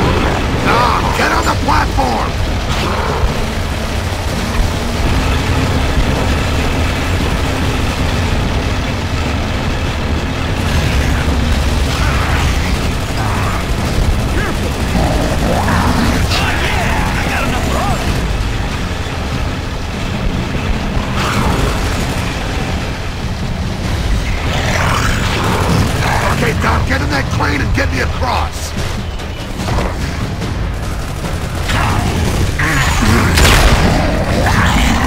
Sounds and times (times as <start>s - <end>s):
Music: 0.0s - 35.0s
Vehicle: 0.0s - 35.0s.